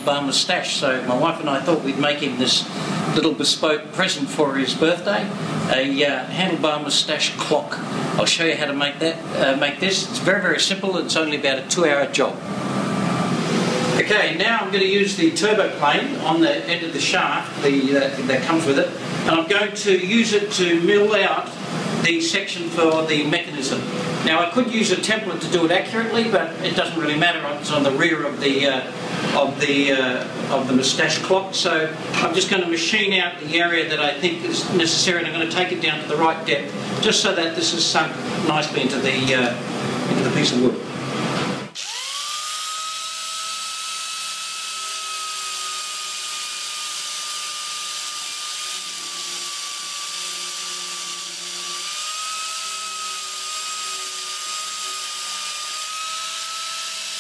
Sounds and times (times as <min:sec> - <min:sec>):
Speech: 0:00.0 - 0:12.4, 0:14.0 - 0:40.9.